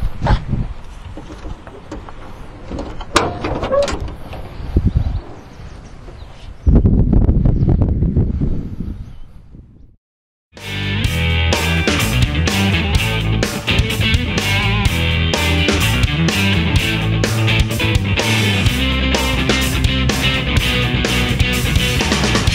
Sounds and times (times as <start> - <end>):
Music: 10.6 - 22.5.